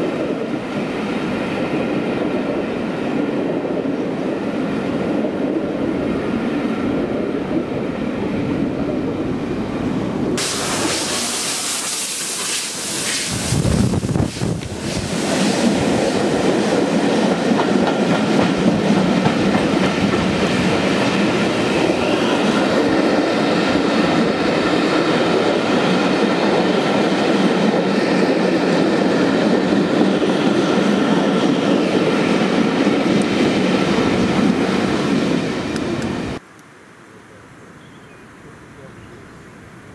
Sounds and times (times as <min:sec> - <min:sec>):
Hiss: 0:10.4 - 0:16.4.